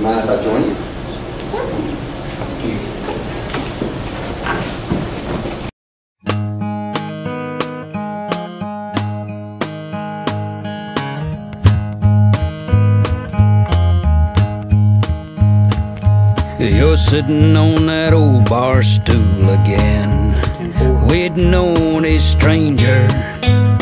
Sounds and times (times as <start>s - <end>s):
Music: 6.2s - 23.8s.